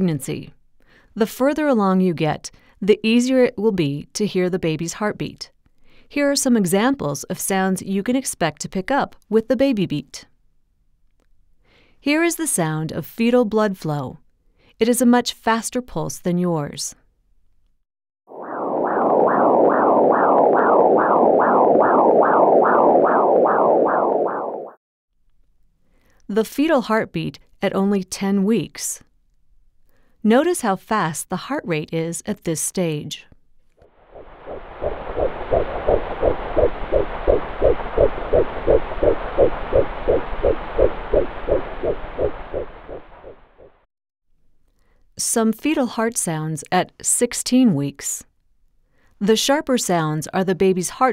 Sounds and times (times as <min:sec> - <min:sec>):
Speech: 0:00.0 - 0:00.6, 0:01.2 - 0:05.5, 0:06.1 - 0:10.3, 0:12.0 - 0:14.2, 0:14.8 - 0:17.0, 0:26.3 - 0:29.1, 0:30.2 - 0:33.3, 0:45.2 - 0:48.3, 0:49.2 - 0:51.1.